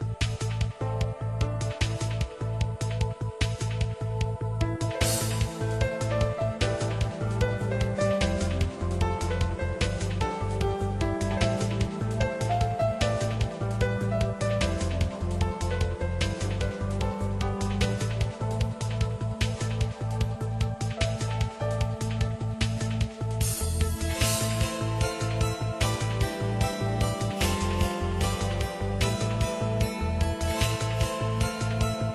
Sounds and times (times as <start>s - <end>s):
Tender music: 0.0s - 32.1s.